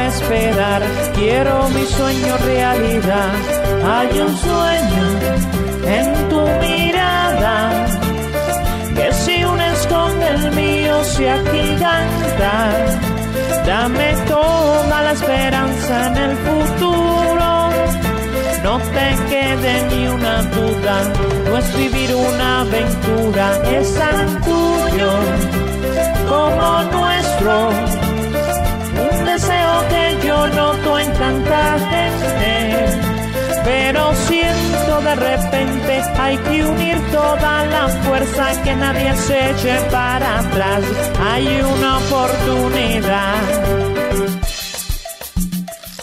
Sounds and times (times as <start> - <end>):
Music: 0.0 - 46.0.